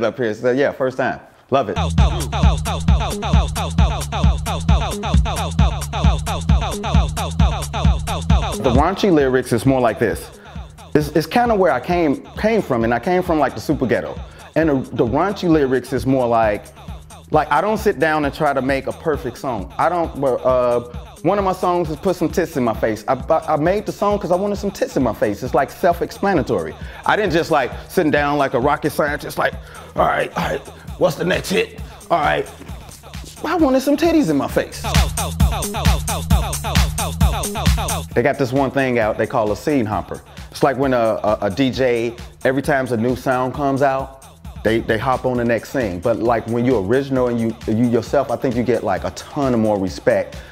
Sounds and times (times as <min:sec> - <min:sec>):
Speech: 0:00.0 - 0:02.4, 0:08.6 - 0:10.4, 0:11.0 - 0:16.7, 0:17.4 - 0:32.6, 0:33.4 - 0:34.9, 0:38.2 - 0:44.1, 0:44.7 - 0:50.4.